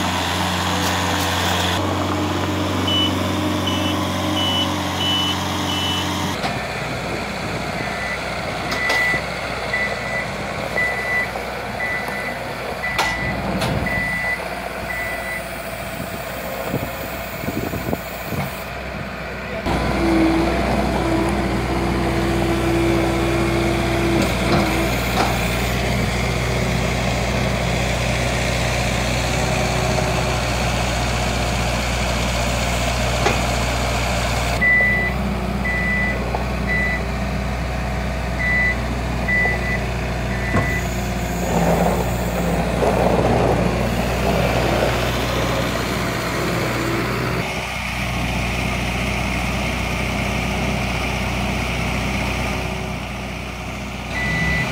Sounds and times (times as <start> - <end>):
Truck: 0.0 - 54.7.